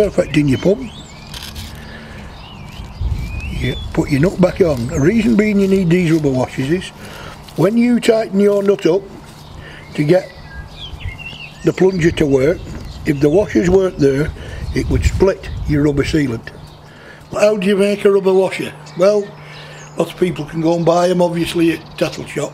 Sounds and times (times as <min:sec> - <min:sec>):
Bird: 0:00.0 - 0:07.7, 0:08.4 - 0:14.9.